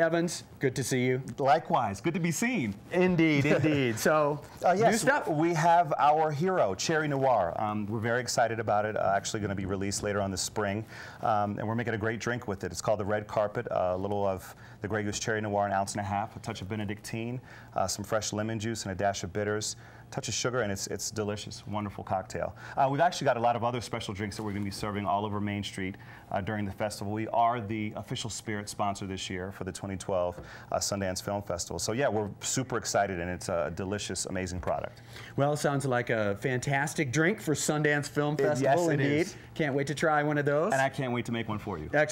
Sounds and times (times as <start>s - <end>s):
Speech: 0.0s - 42.1s.